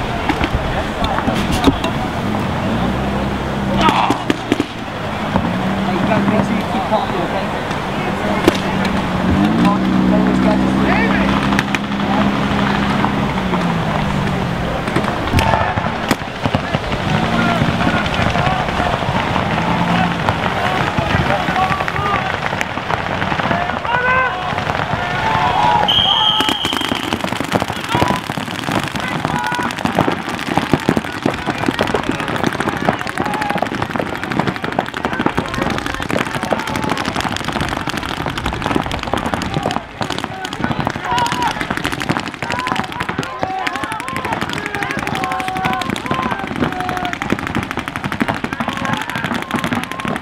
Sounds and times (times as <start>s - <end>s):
Firecracker: 0.0s - 50.2s
Speech: 3.7s - 4.3s, 5.8s - 9.0s, 9.6s - 12.8s, 16.6s - 22.4s, 34.4s - 37.2s, 39.2s - 41.6s, 42.4s - 47.4s, 48.4s - 50.2s.